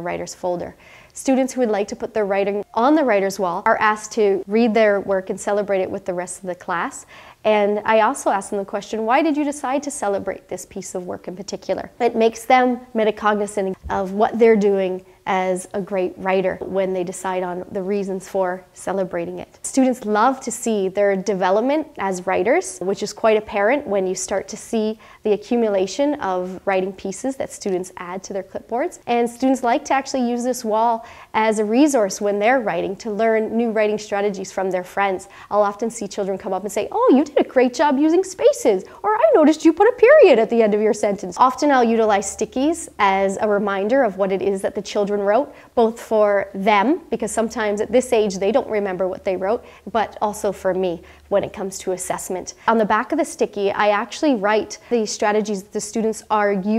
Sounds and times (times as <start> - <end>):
Speech: 0.0 - 56.7.